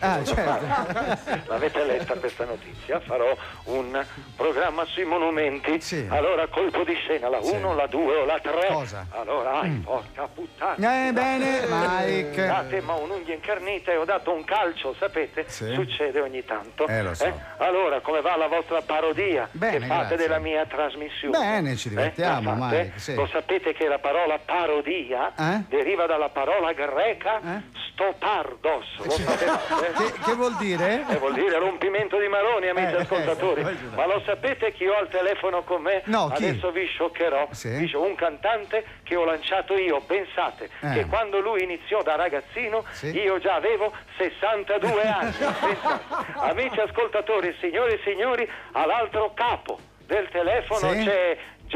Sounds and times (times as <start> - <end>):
Music: 0.0 - 51.7
Speech: 1.5 - 45.3.